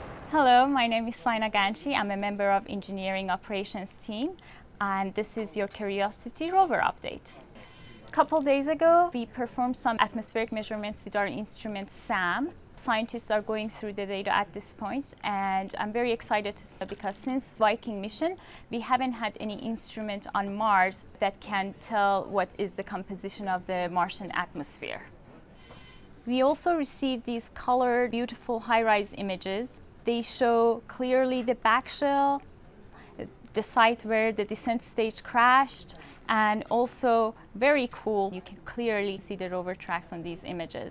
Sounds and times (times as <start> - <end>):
Speech: 0.3 - 7.5, 8.1 - 25.2, 26.3 - 40.9.